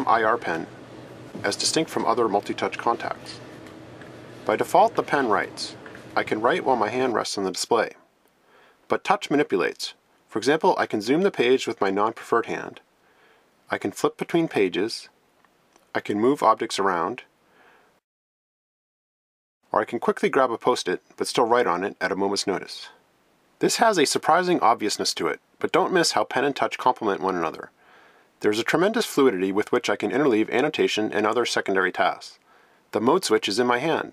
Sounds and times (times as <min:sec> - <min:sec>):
Speech: 0:00.0 - 0:00.7, 0:01.4 - 0:03.4, 0:04.5 - 0:08.0, 0:08.9 - 0:12.8, 0:13.7 - 0:15.2, 0:15.9 - 0:17.3, 0:19.7 - 0:23.0, 0:23.6 - 0:27.7, 0:28.4 - 0:34.1.